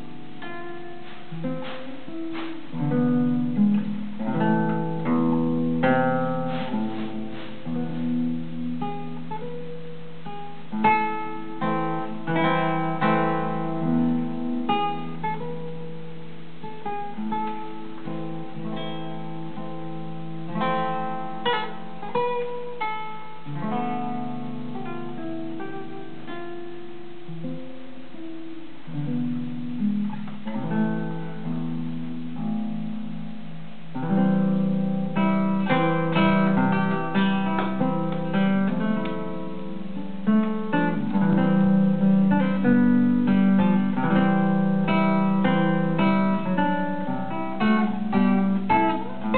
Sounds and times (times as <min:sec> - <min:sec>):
Music: 0:00.0 - 0:49.3.